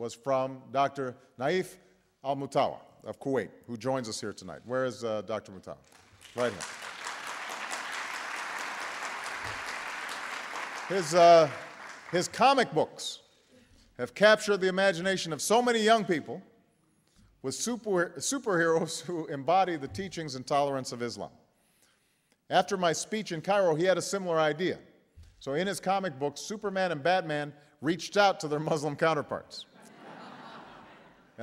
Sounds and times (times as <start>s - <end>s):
Speech: 0.0s - 5.8s, 6.4s - 6.6s, 12.2s - 13.2s, 14.0s - 16.4s, 17.4s - 21.4s, 22.5s - 24.8s, 25.4s - 29.7s.